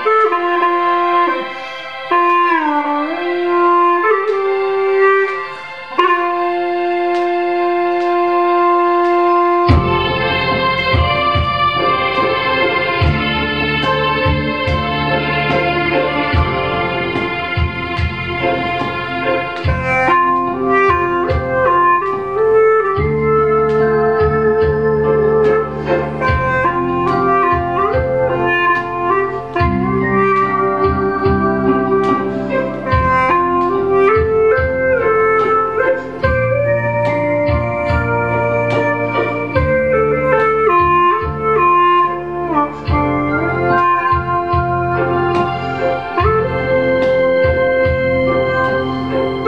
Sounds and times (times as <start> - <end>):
Clarinet: 0.0 - 49.4.